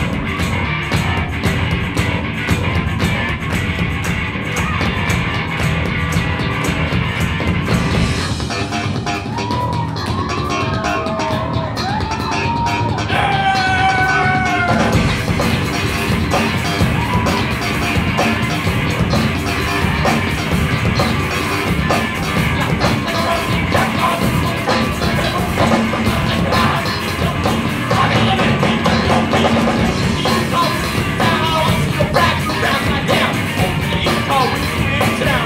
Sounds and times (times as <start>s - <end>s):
Music: 0.0s - 35.4s
Screaming: 9.2s - 15.0s, 16.8s - 17.6s.